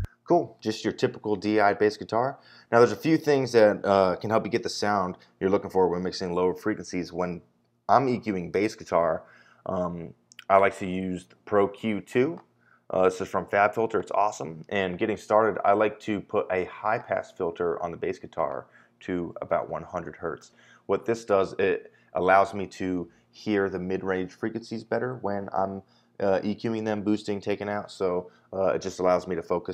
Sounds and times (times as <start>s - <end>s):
Speech: 0.0s - 29.7s.